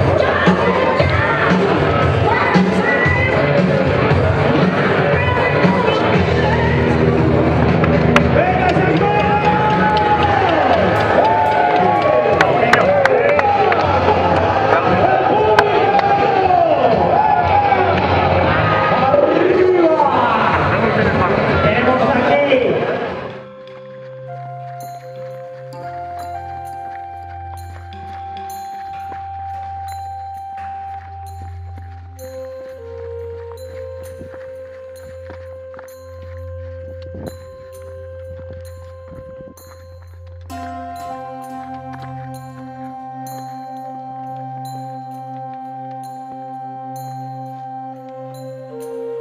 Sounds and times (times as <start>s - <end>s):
Music: 0.0s - 49.2s
Outside, urban or manmade: 0.0s - 49.2s
Speech: 18.9s - 23.0s.